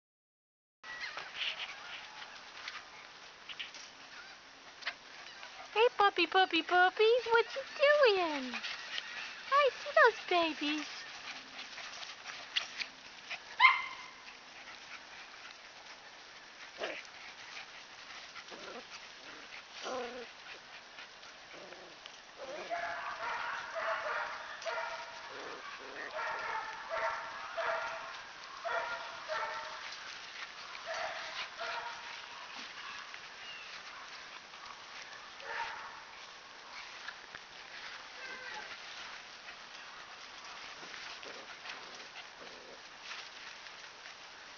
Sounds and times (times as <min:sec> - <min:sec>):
Speech: 0:05.8 - 0:08.6, 0:09.5 - 0:10.9
Dog: 0:07.4 - 0:43.6.